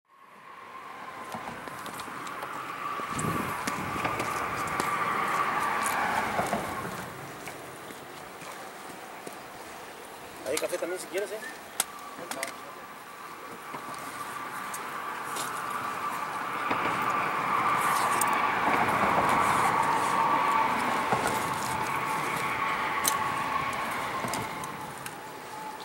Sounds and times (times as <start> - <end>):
Speech: 10.4 - 11.6, 12.2 - 12.8.